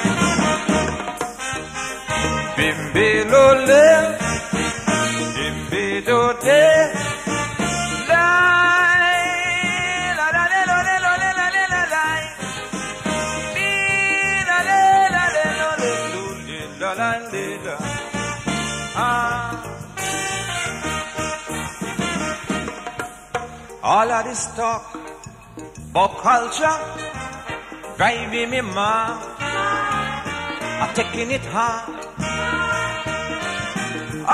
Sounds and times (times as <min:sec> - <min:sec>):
Music: 0:00.0 - 0:34.3.